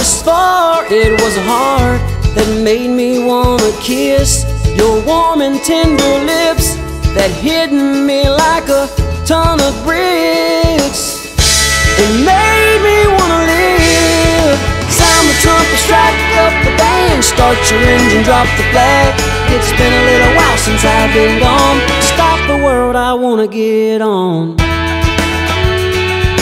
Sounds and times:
Country: 0.0 - 23.4.

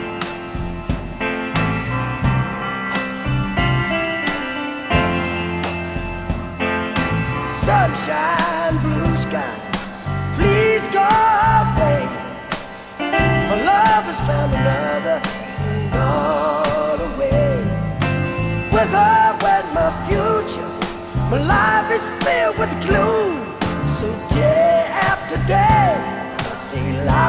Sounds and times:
Music: 0.0 - 27.2.

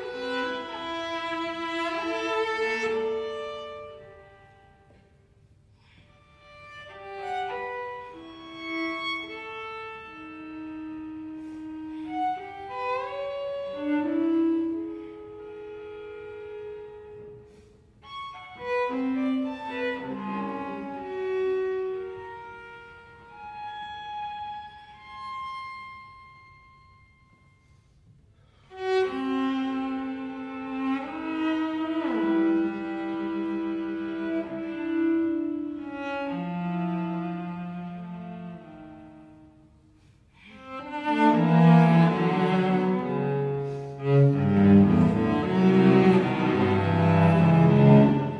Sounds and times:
Cello: 0.0 - 48.4.

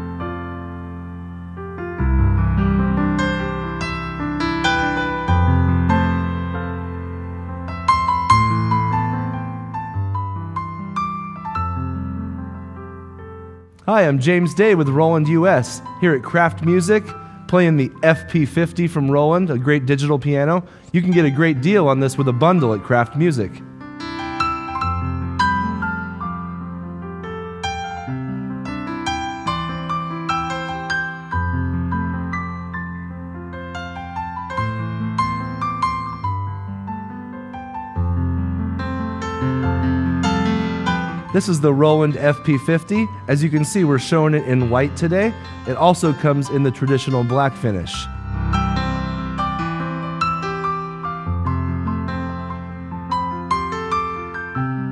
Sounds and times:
Music: 0.0 - 54.9.

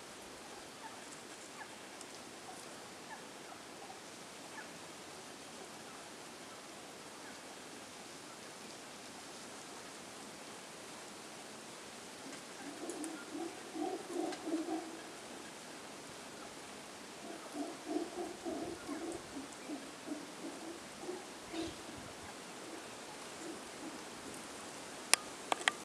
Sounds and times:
Rustle: 0.0 - 25.8.

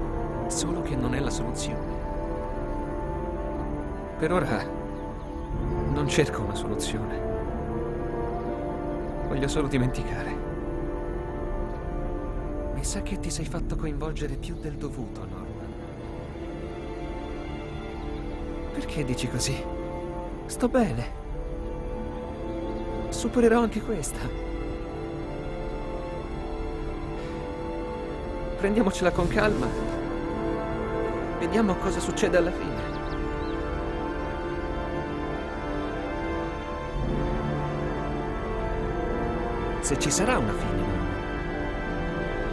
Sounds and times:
Music: 0.0 - 42.5
Speech: 0.5 - 1.8, 5.9 - 7.2, 9.3 - 10.4, 12.8 - 15.7, 18.8 - 19.7, 28.6 - 29.8, 31.4 - 32.9, 39.8 - 41.1.

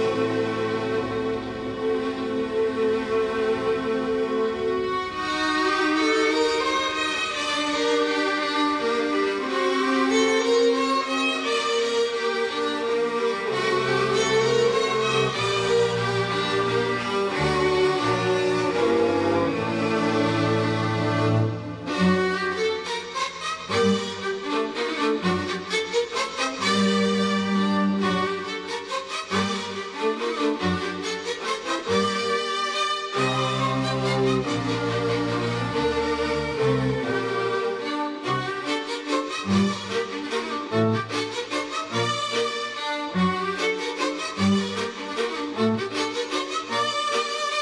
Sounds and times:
String section: 0.0 - 47.6
Violin, fiddle: 0.0 - 47.6.

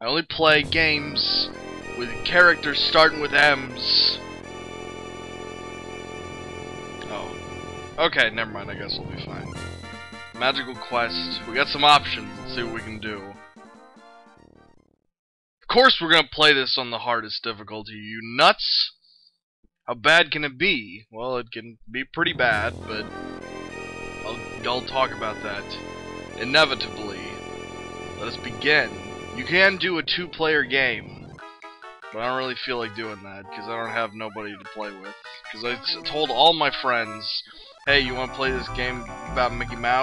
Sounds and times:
Speech: 0.0 - 4.2, 7.0 - 7.4, 8.0 - 9.5, 10.4 - 13.4, 15.7 - 18.9, 19.9 - 23.1, 24.3 - 25.8, 26.4 - 27.4, 28.2 - 31.3, 32.2 - 40.0
Music: 0.5 - 15.0, 22.4 - 40.0.

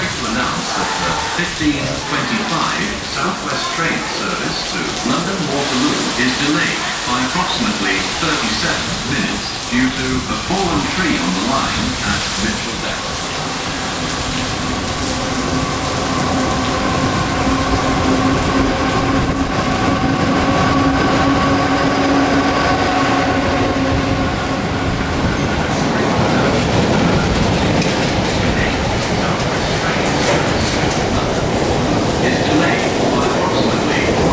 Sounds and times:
Speech: 0.0 - 13.2, 25.6 - 27.4, 28.0 - 31.5, 32.2 - 34.3.

